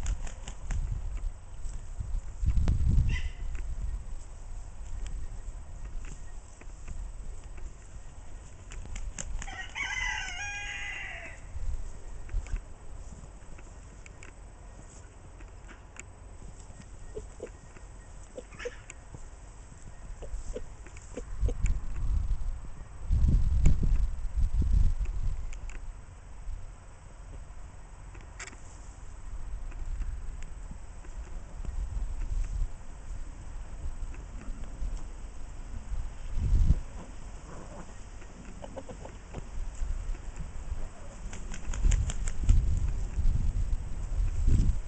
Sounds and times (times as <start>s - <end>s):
Bird flight, flapping wings: 0.0s - 0.9s, 8.6s - 9.8s, 41.2s - 42.9s.